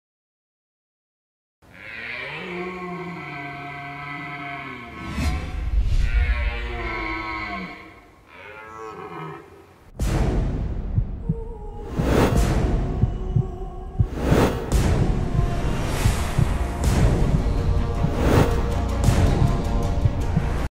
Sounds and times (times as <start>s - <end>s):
Whoosh, swoosh, swish: 11.8s - 12.7s, 14.1s - 15.0s, 18.0s - 18.6s.